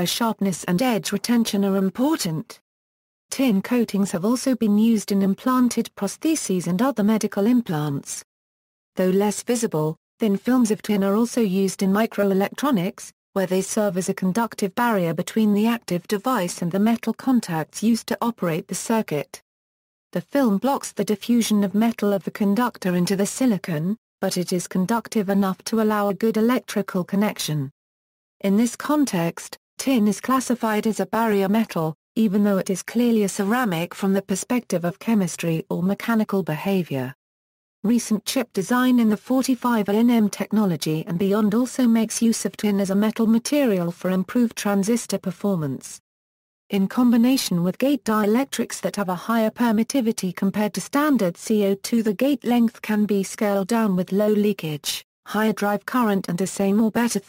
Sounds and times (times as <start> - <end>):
Speech synthesizer: 0.0 - 2.6, 3.3 - 8.2, 9.0 - 19.4, 20.2 - 27.7, 28.4 - 37.2, 37.9 - 46.0, 46.7 - 57.2.